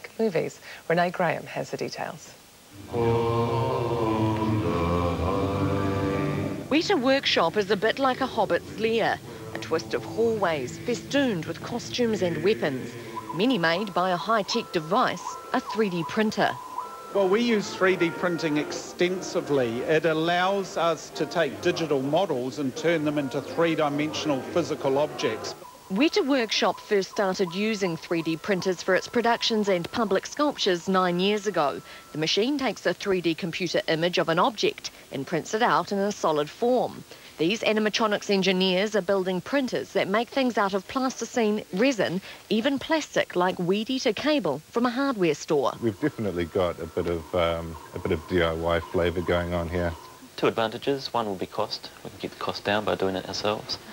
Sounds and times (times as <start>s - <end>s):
Speech: 0.0s - 2.4s, 6.8s - 16.6s, 17.2s - 53.8s.